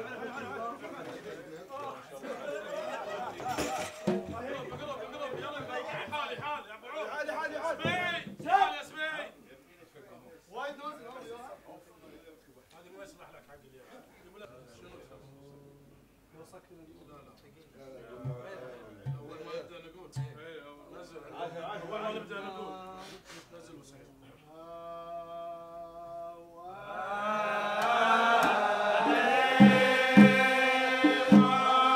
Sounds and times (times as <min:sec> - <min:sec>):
Speech: 0:00.0 - 0:25.4.